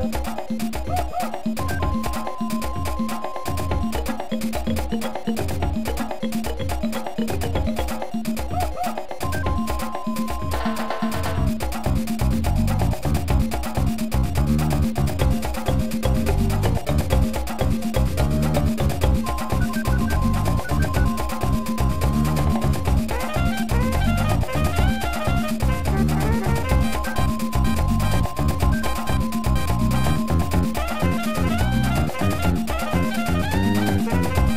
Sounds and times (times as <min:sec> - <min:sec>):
Video game music: 0:00.0 - 0:34.5.